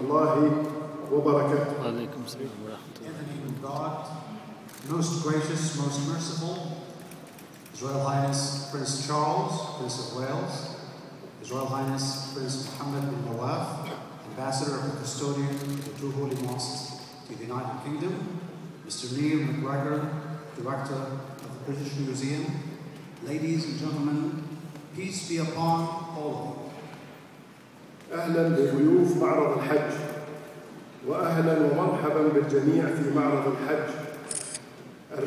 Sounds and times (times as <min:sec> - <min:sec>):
Male speech, man speaking: 0:00.0 - 0:06.7, 0:07.8 - 0:10.8, 0:11.4 - 0:18.3, 0:18.9 - 0:24.4, 0:25.0 - 0:26.7, 0:28.1 - 0:30.1, 0:31.0 - 0:34.1
Narration, monologue: 0:00.0 - 0:35.2.